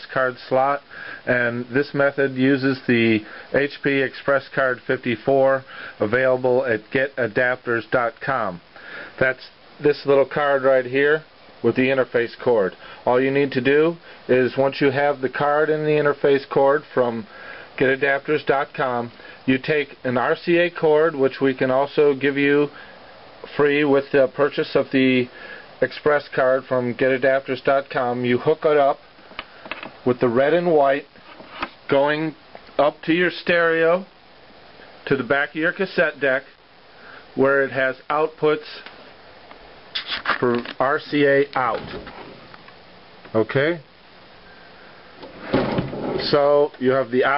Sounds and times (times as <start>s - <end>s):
Speech: 0.0s - 22.8s, 23.4s - 29.0s, 30.0s - 31.1s, 31.9s - 34.1s, 35.0s - 36.6s, 37.4s - 38.9s, 40.0s - 42.0s, 43.3s - 43.9s, 46.2s - 47.3s.